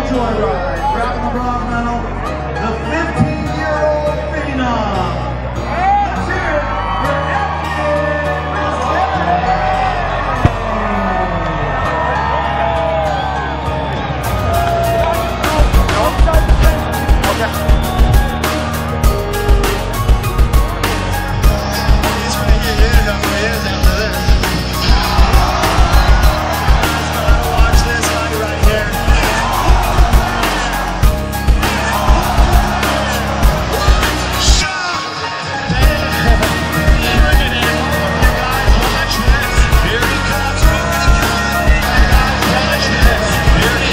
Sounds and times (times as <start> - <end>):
Music: 0.0 - 43.9.